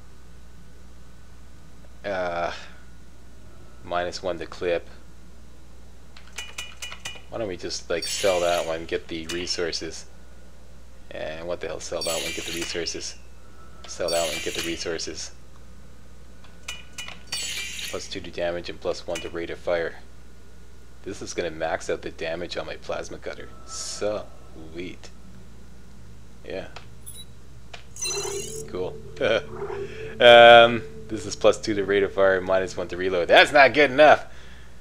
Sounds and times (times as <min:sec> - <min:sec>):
Speech: 0:02.0 - 0:02.7, 0:03.8 - 0:05.0, 0:07.3 - 0:10.1, 0:11.1 - 0:13.2, 0:13.9 - 0:15.4, 0:18.0 - 0:20.1, 0:21.0 - 0:25.1, 0:26.4 - 0:26.8, 0:30.2 - 0:34.3.